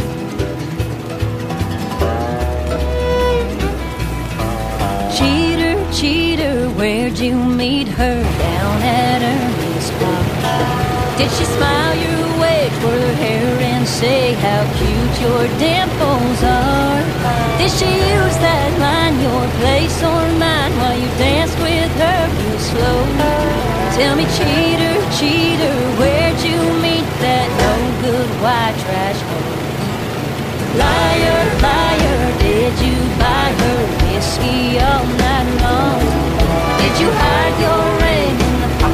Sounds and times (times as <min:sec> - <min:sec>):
Car: 0:00.0 - 0:38.9
Music: 0:00.0 - 0:38.9.